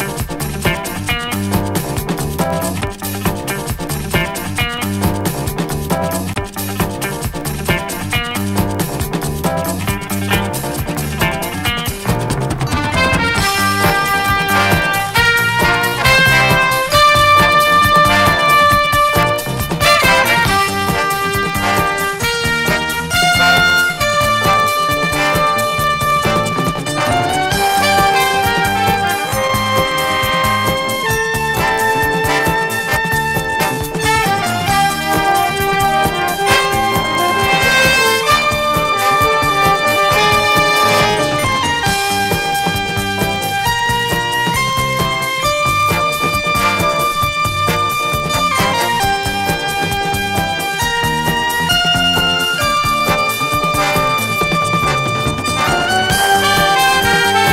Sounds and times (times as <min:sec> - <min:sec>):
Music: 0:00.0 - 0:57.5.